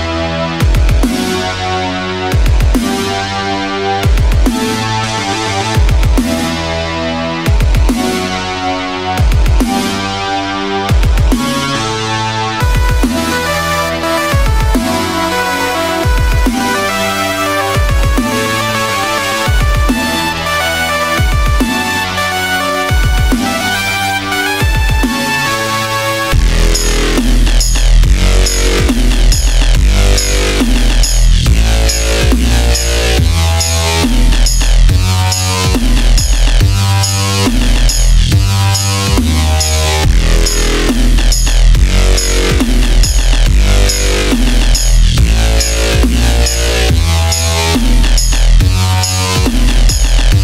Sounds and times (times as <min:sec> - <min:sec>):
Dubstep: 0:00.0 - 0:50.4.